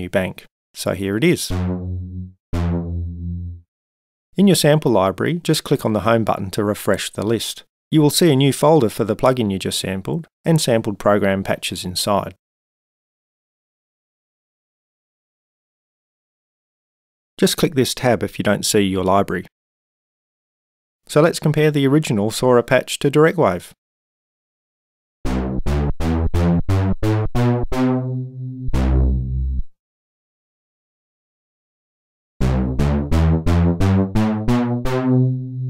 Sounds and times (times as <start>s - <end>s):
Speech: 0.0s - 1.5s, 4.4s - 12.4s, 17.4s - 19.5s, 21.1s - 23.8s
Sampler: 1.3s - 3.6s, 25.3s - 29.7s, 32.4s - 35.6s.